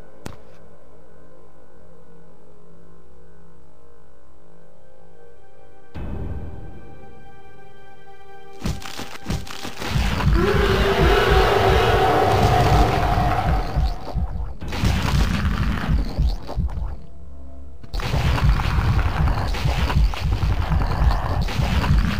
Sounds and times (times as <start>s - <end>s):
Music: 0.0s - 22.1s.